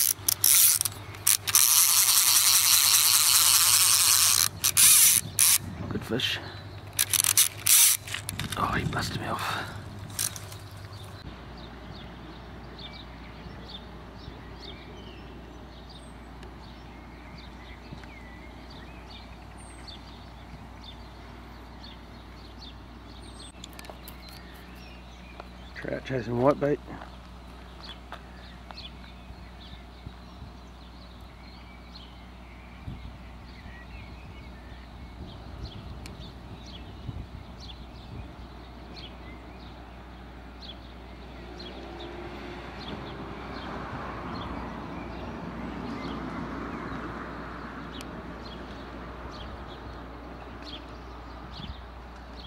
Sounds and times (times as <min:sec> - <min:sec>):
Outside, rural or natural: 0:00.0 - 0:52.4
Speech: 0:05.8 - 0:06.6, 0:08.6 - 0:09.8, 0:25.8 - 0:27.0.